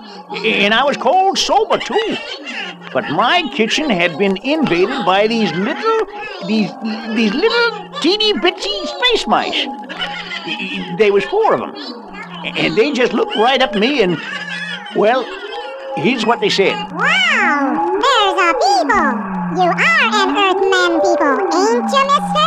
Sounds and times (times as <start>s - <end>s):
Speech: 0.0s - 2.2s, 2.9s - 9.8s, 10.5s - 11.9s, 12.5s - 14.2s, 15.0s - 15.4s, 16.0s - 22.4s.